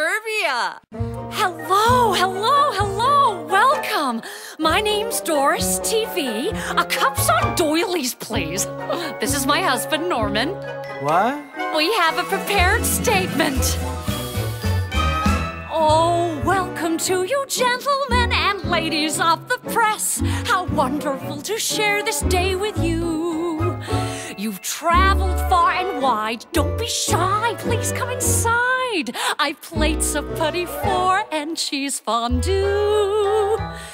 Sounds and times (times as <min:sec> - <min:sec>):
Speech: 0:00.0 - 0:04.1, 0:09.2 - 0:13.7
Music: 0:00.9 - 0:33.9.